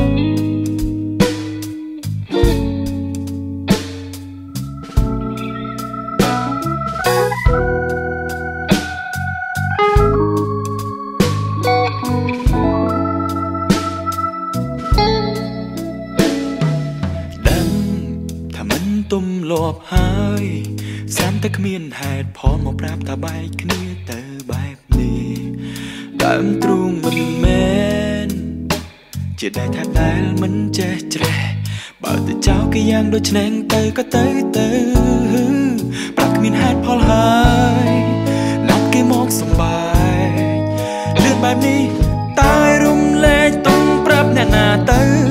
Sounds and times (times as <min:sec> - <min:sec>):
Music: 0:00.0 - 0:45.3.